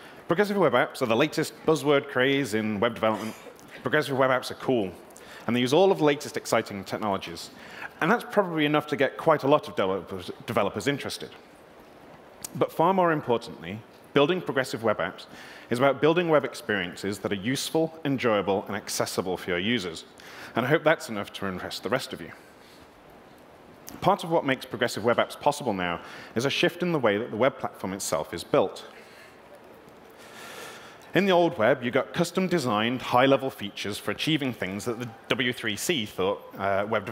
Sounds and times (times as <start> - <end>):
Speech: 0.3 - 11.4, 12.5 - 22.4, 23.9 - 29.0, 31.1 - 37.1.